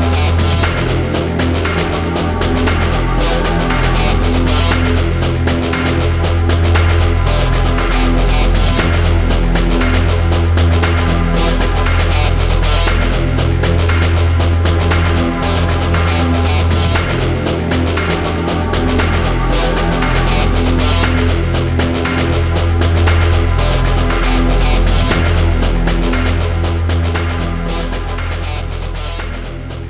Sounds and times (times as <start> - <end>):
Music: 0.0 - 29.8.